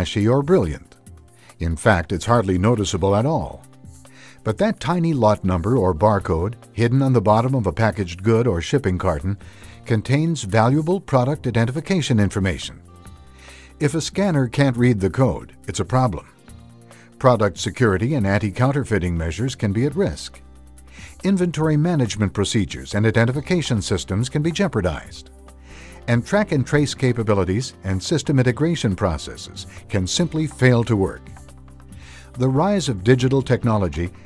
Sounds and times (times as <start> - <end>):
Speech: 0.0 - 1.0, 1.6 - 3.6, 4.4 - 12.8, 13.8 - 16.4, 17.2 - 20.4, 21.0 - 25.2, 26.1 - 31.3, 32.4 - 34.2
Music: 0.0 - 34.2.